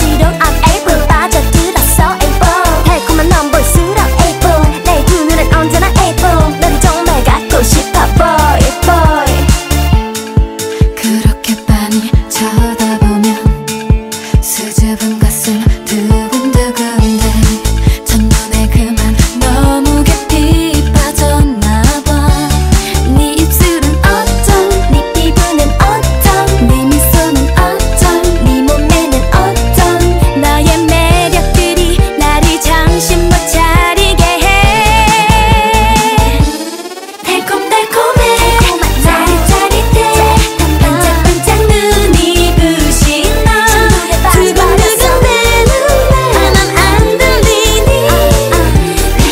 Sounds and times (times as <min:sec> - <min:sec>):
Music: 0:00.0 - 0:49.3.